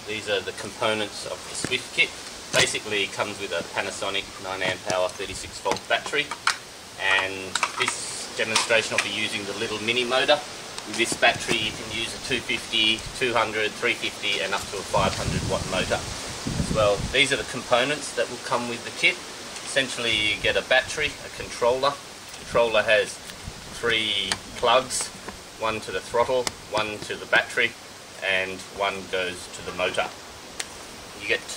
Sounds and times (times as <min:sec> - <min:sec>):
Speech: 0:00.0 - 0:06.4, 0:07.0 - 0:23.2, 0:23.8 - 0:30.2, 0:31.2 - 0:31.5.